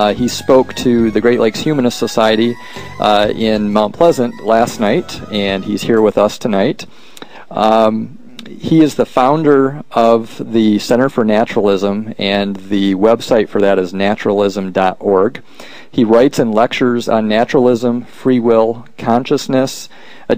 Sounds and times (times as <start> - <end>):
Male speech, man speaking: 0.0 - 6.9, 7.6 - 15.4, 16.0 - 20.3
Narration, monologue: 0.0 - 20.3.